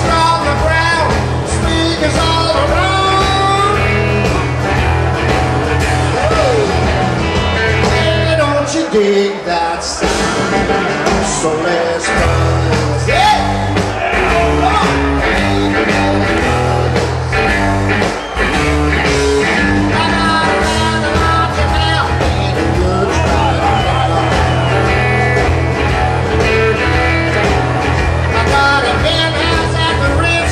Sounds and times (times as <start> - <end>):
Music: 0.0 - 30.5.